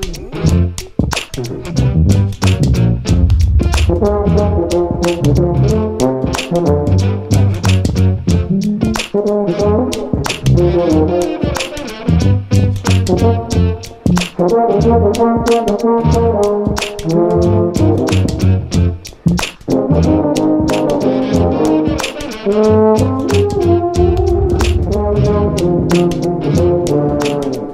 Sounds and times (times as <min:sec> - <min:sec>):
Brass instrument: 0:01.7 - 0:27.7.